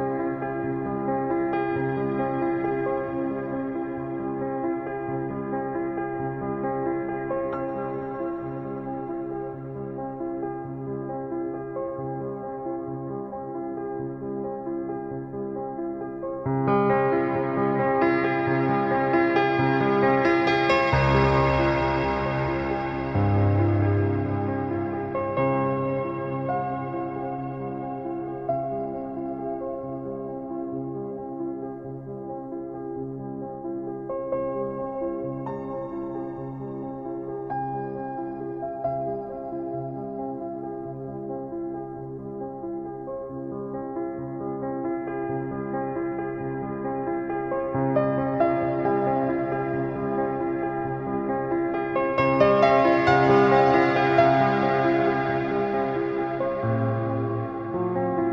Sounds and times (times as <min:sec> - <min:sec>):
Ambient music: 0:15.2 - 0:41.5, 0:44.6 - 0:58.3.